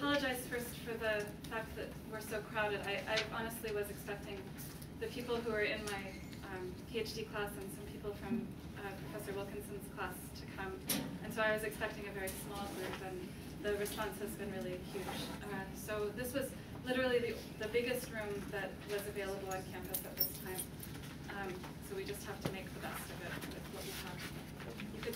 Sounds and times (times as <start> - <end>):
Speech: 0.0 - 20.7, 21.3 - 25.1.